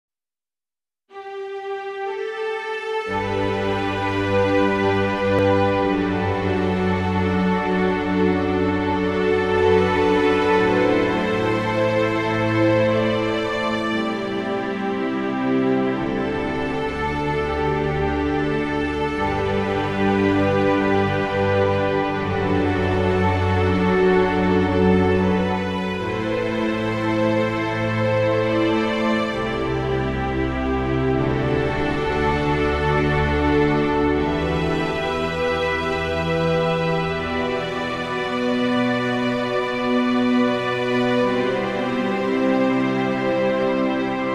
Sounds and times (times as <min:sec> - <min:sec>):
Background music: 0:01.1 - 0:44.3
New-age music: 0:01.1 - 0:44.3
Theme music: 0:03.1 - 0:44.3.